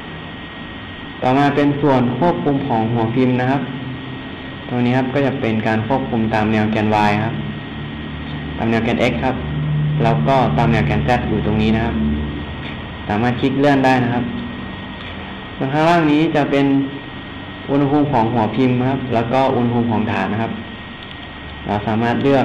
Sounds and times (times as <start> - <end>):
Speech: 1.2 - 3.8, 4.7 - 7.4, 8.6 - 9.4, 10.0 - 12.1, 13.1 - 14.4, 15.6 - 17.0, 17.7 - 20.6, 21.7 - 22.4.